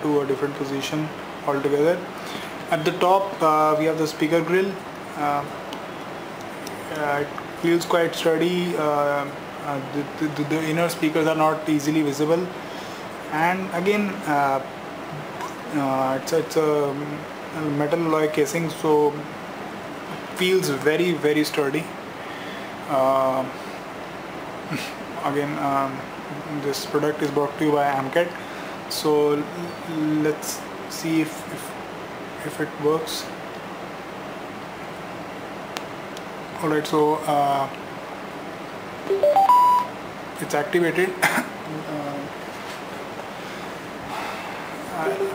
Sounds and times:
Speech: 0.0 - 2.1, 2.7 - 5.6, 6.8 - 12.6, 13.3 - 14.7, 15.7 - 19.3, 20.4 - 21.9, 22.9 - 23.6, 24.7 - 31.8, 32.4 - 33.4, 36.6 - 37.8, 40.4 - 42.3, 44.9 - 45.3.

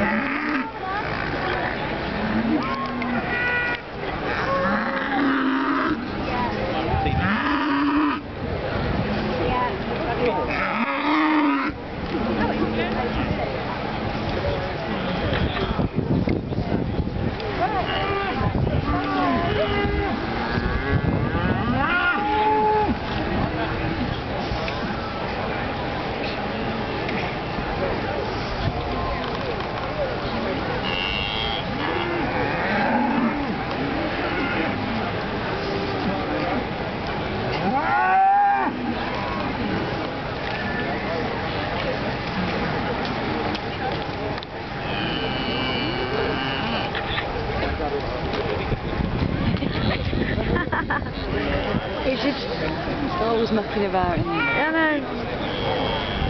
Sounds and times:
Moo: 0.0 - 0.7, 4.3 - 6.0, 7.2 - 8.2, 10.5 - 11.8, 30.8 - 33.6, 34.2 - 34.7, 44.9 - 47.0.

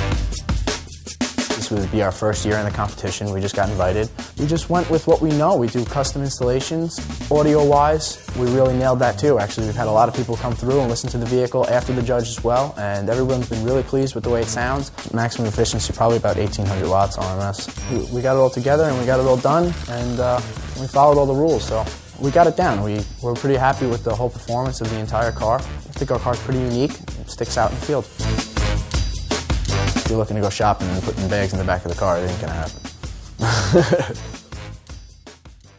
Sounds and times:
Music: 0.0 - 35.7
Speech: 1.6 - 28.1, 30.0 - 32.8.

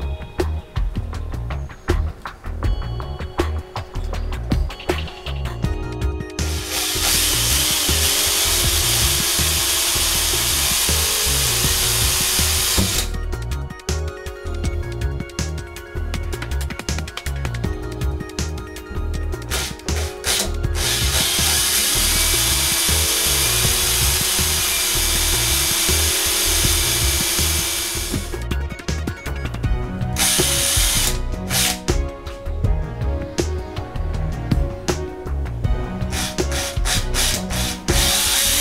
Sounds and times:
Music: 0.0 - 38.6.

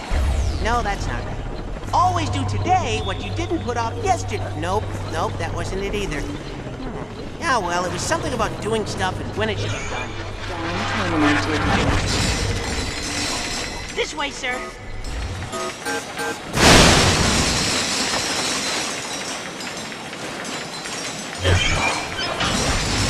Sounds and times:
Speech: 0.5 - 1.3, 2.0 - 11.9, 14.0 - 14.6
Music: 0.6 - 16.6.

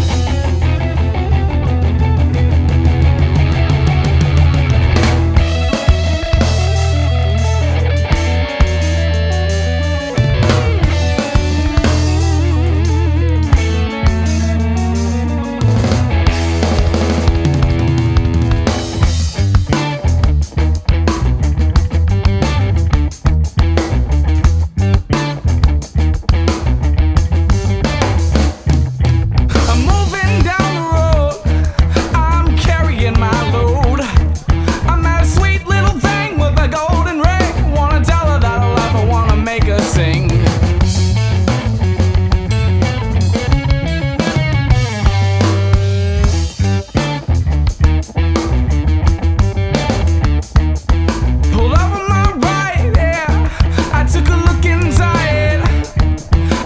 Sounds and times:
Music: 0.0 - 56.6.

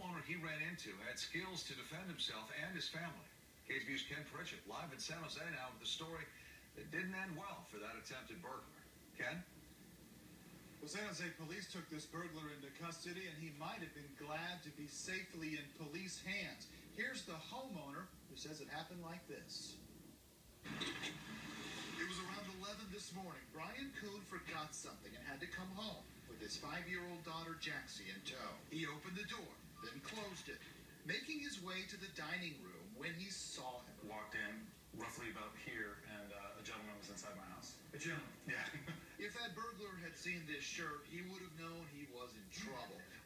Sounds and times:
Speech: 0.0 - 9.5, 10.8 - 19.8, 22.0 - 43.2.

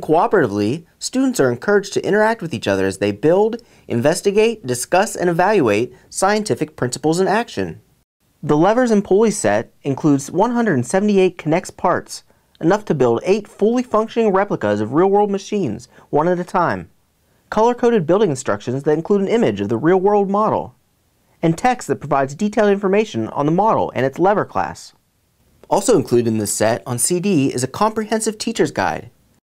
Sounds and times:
Speech: 0.0 - 7.8, 8.4 - 16.9, 17.5 - 20.8, 21.4 - 25.0, 25.6 - 29.2.

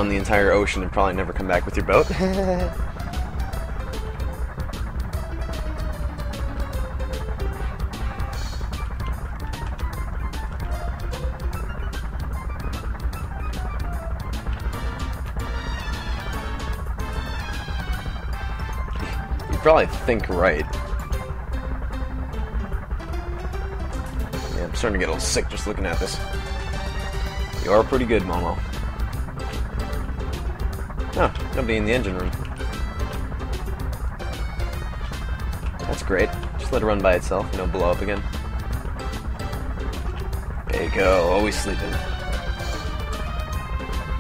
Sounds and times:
Speech: 0.0 - 2.8, 19.5 - 20.7, 24.6 - 26.2, 27.6 - 28.6, 31.2 - 32.3, 35.9 - 38.2, 40.7 - 42.0
Music: 0.0 - 44.2.

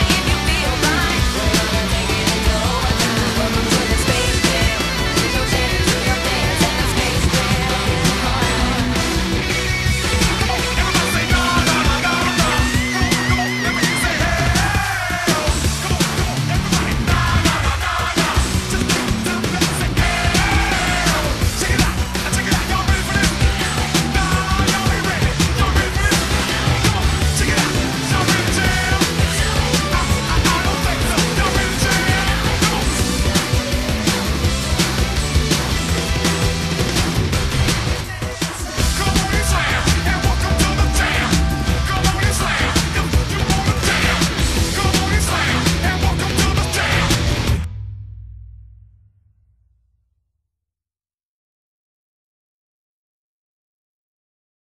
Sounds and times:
Music: 0.0 - 49.2.

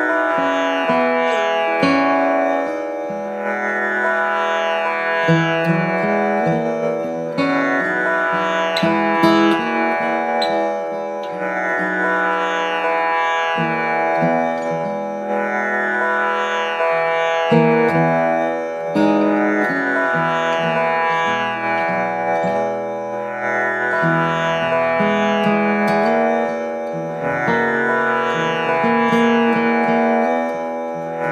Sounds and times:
Acoustic guitar: 0.0 - 31.3
Carnatic music: 0.0 - 31.3.

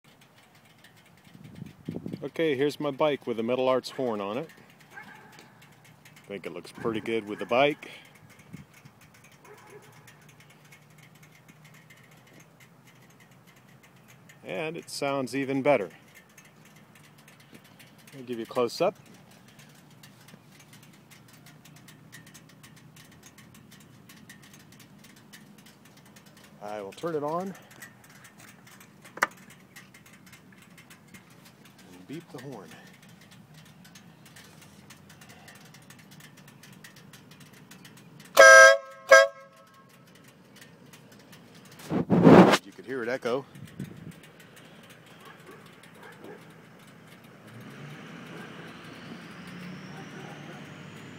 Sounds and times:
Speech: 2.2 - 4.5, 6.3 - 8.0, 14.4 - 16.0, 18.2 - 19.0, 26.6 - 27.6, 31.9 - 32.9, 42.6 - 43.5, 49.9 - 50.6
Air horn, truck horn: 38.4 - 39.6.

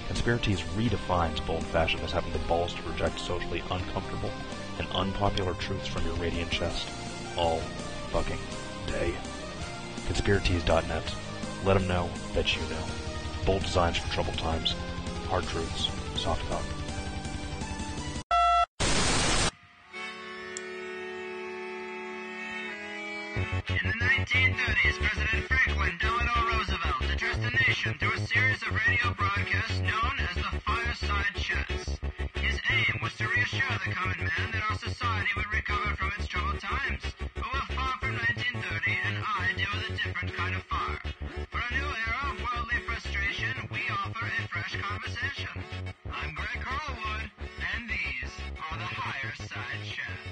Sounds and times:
Speech: 0.0 - 9.3, 10.1 - 16.7, 23.7 - 50.3
Music: 0.0 - 50.3.

